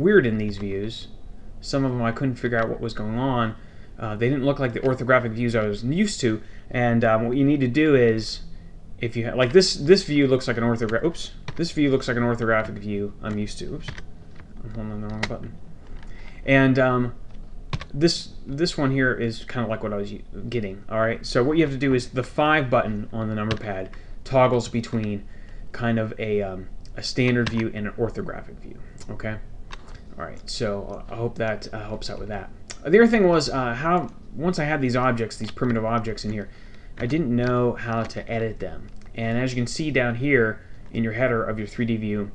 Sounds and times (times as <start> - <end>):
Speech: 0.0 - 14.0, 14.6 - 15.6, 16.4 - 17.2, 17.9 - 29.5, 30.2 - 42.3.